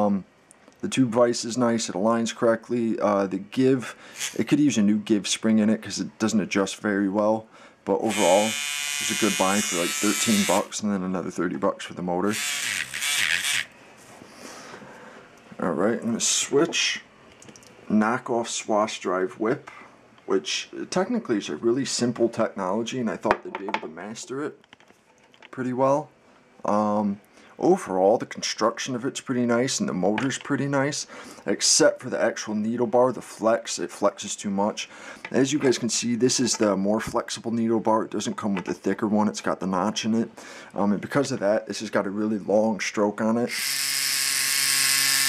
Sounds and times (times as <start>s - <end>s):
Speech: 0.0s - 12.4s, 15.6s - 17.1s, 17.9s - 19.7s, 20.3s - 24.6s, 25.5s - 43.6s.